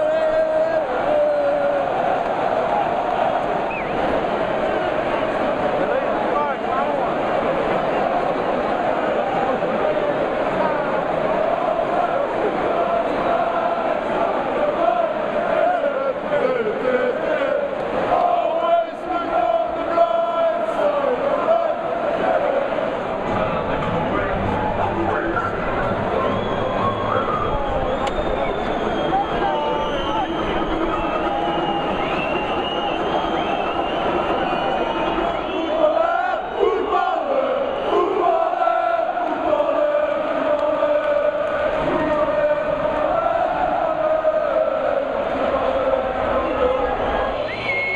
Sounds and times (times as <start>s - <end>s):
Speech: 5.4s - 7.6s, 23.3s - 31.3s.